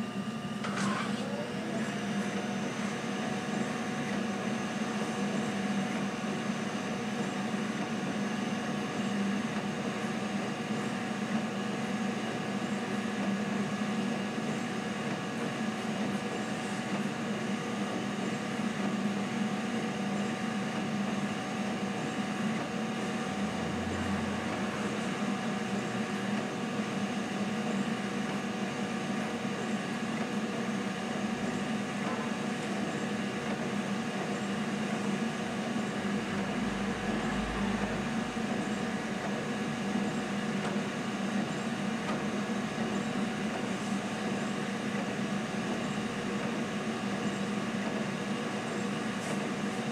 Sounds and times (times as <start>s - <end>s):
Printer: 0.0s - 49.9s.